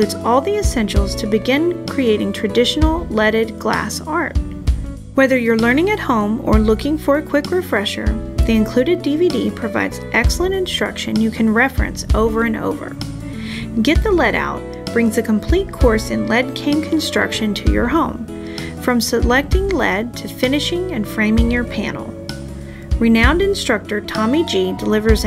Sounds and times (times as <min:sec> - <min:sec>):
Speech: 0:00.0 - 0:04.4, 0:05.2 - 0:13.0, 0:13.7 - 0:22.2, 0:23.0 - 0:25.2
Music: 0:00.0 - 0:25.2.